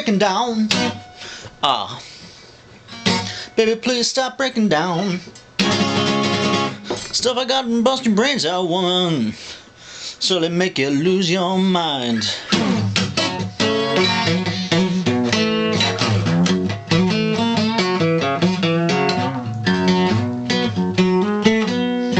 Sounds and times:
Strum: 12.2 - 22.1.

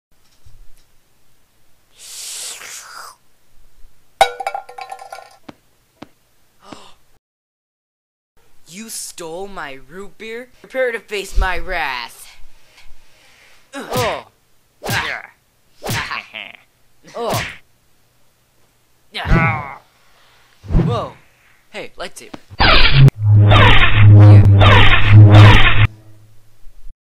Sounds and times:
Speech: 8.7 - 12.4, 13.8 - 14.3, 14.9 - 15.4, 16.0 - 17.5, 20.8 - 22.4.

